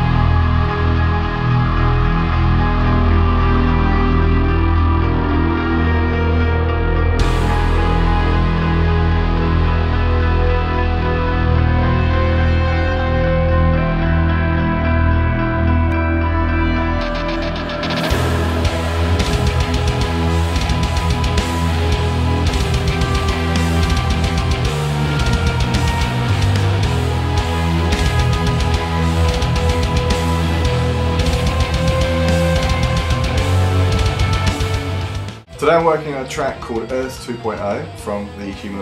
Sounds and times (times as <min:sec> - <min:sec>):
Guitar: 0:00.0 - 0:38.8.